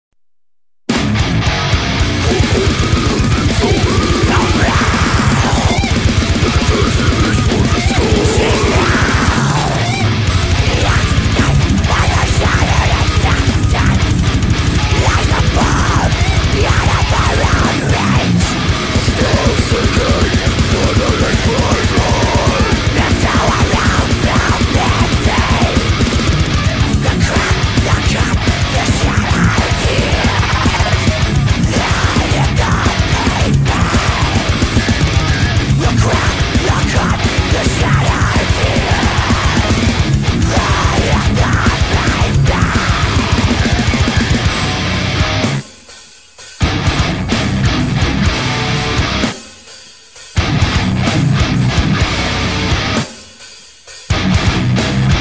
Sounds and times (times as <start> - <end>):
Music: 0.9 - 55.2.